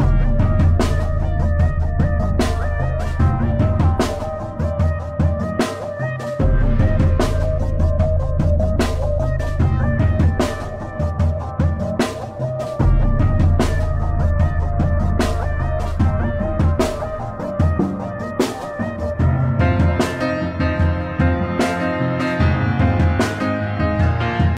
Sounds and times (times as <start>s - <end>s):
Music: 0.0s - 24.5s.